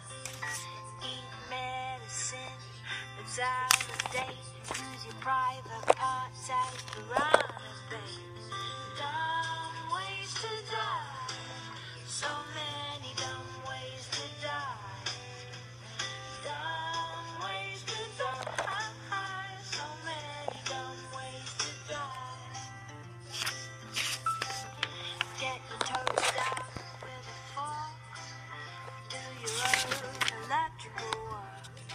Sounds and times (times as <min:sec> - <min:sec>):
Music: 0:00.0 - 0:31.9.